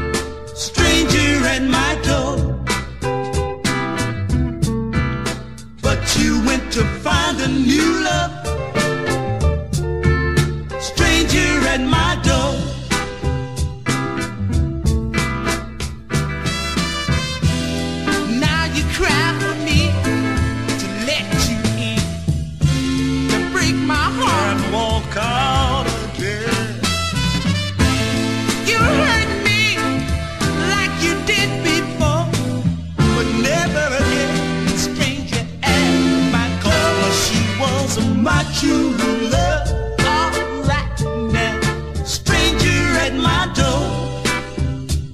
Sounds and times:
Music: 0:00.0 - 0:45.1.

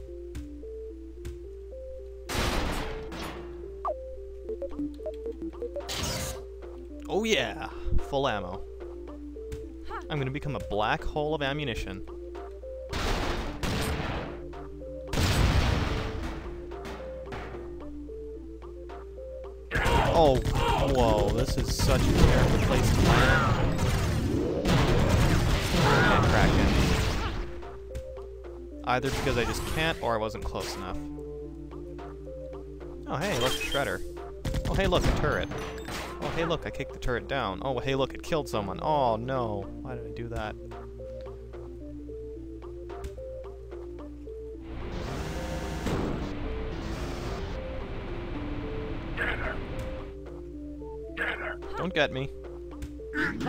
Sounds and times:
Music: 0:00.0 - 0:53.4
Speech: 0:07.1 - 0:08.6, 0:09.9 - 0:12.0, 0:19.8 - 0:23.5, 0:28.9 - 0:31.0, 0:33.1 - 0:34.0, 0:34.7 - 0:35.5, 0:36.3 - 0:40.6
Artillery fire: 0:12.9 - 0:14.4, 0:15.1 - 0:16.2, 0:20.4 - 0:27.4.

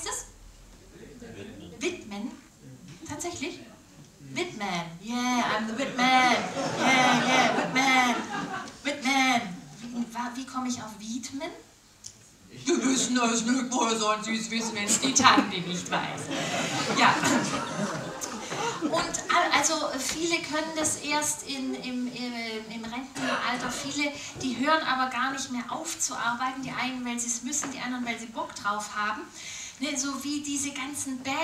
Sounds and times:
Speech: 0:18.8 - 0:31.4.

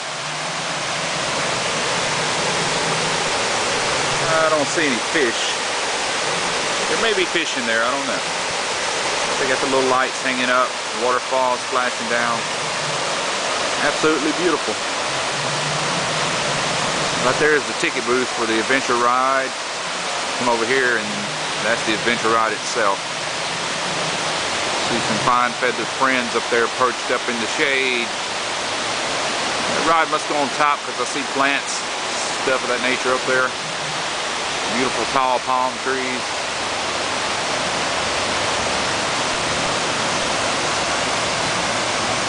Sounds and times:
Speech: 0:04.2 - 0:05.6, 0:06.9 - 0:08.2, 0:09.4 - 0:12.4, 0:13.8 - 0:14.8, 0:17.2 - 0:19.6, 0:20.4 - 0:23.0, 0:24.9 - 0:28.1, 0:29.7 - 0:33.6, 0:34.7 - 0:36.3.

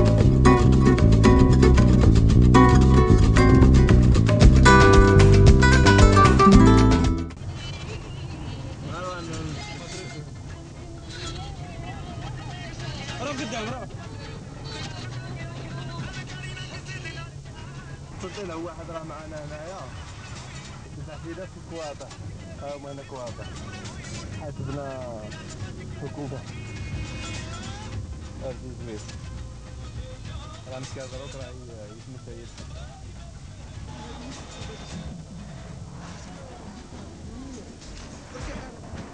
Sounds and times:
Music: 0:00.0 - 0:07.4, 0:09.3 - 0:18.3, 0:22.1 - 0:35.7
Speech: 0:20.9 - 0:26.5, 0:30.4 - 0:33.9.

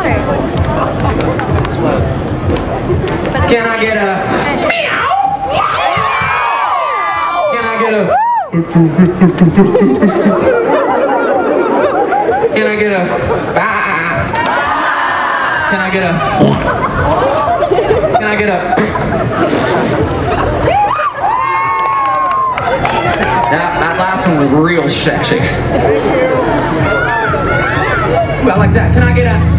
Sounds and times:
Whoop: 0:05.6 - 0:08.5, 0:20.7 - 0:22.7.

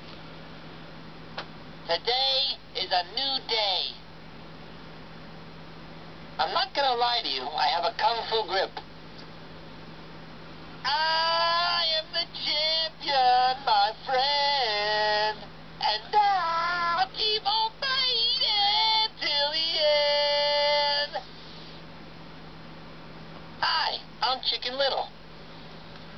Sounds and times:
Speech: 0:01.9 - 0:04.0, 0:06.4 - 0:08.8, 0:23.6 - 0:25.2.

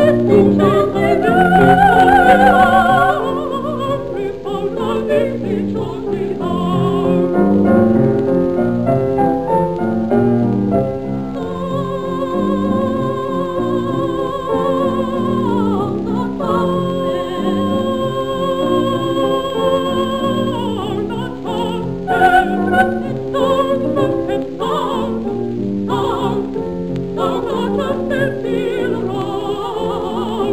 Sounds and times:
Opera: 0:00.0 - 0:30.5.

